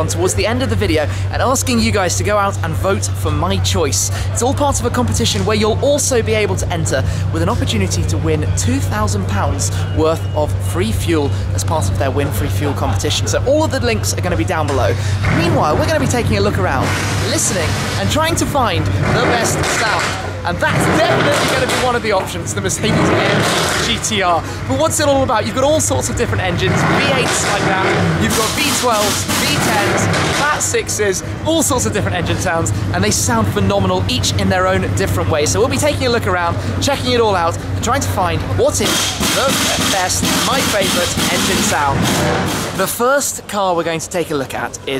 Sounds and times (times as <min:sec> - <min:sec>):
Speech: 0:00.0 - 0:42.2, 0:42.8 - 0:45.0.